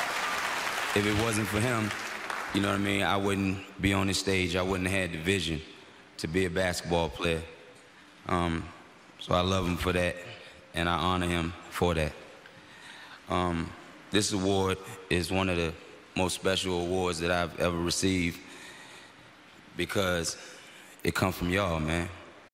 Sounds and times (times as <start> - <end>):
Narration, monologue: 0.8 - 22.5
Male speech, man speaking: 1.0 - 7.6, 8.3 - 12.2, 13.3 - 18.4, 19.8 - 20.4, 21.0 - 22.3.